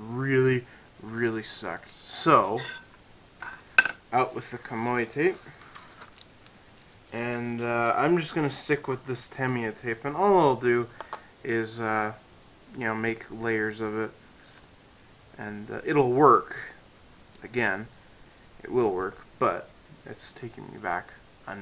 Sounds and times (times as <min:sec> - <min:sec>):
Speech: 0:00.0 - 0:02.8, 0:04.2 - 0:05.5, 0:07.2 - 0:10.9, 0:11.5 - 0:14.2, 0:15.4 - 0:16.8, 0:17.4 - 0:17.9, 0:18.6 - 0:21.6
Inside, small room: 0:00.0 - 0:21.6.